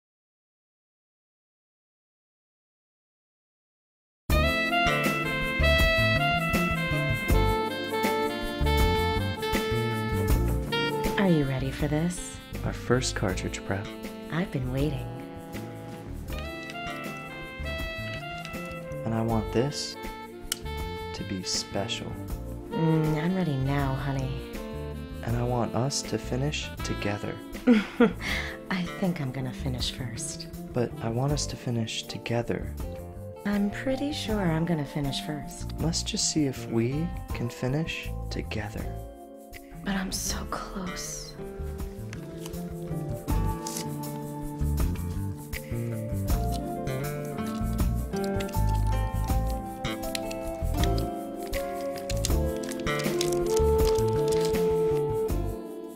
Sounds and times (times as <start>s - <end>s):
Music: 4.3s - 55.9s
Speech: 11.2s - 15.0s, 22.8s - 24.3s, 25.3s - 27.4s, 28.7s - 32.8s, 33.5s - 39.0s.